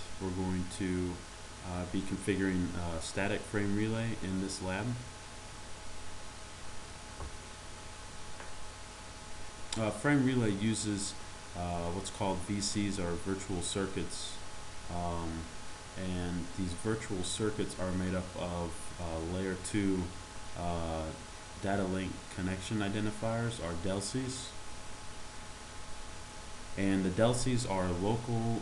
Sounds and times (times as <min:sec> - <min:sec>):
Speech: 0:00.0 - 0:05.1, 0:09.8 - 0:24.6, 0:26.8 - 0:28.6.